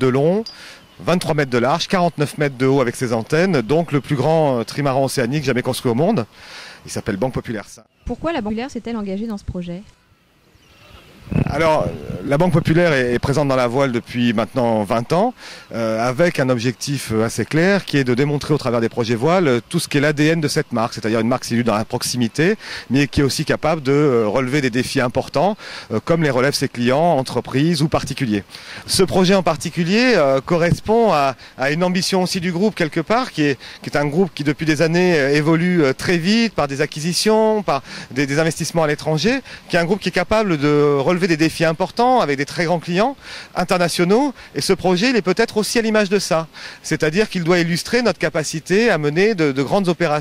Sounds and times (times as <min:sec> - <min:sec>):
Speech: 0:00.0 - 0:06.3, 0:06.9 - 0:09.9, 0:11.3 - 0:50.2.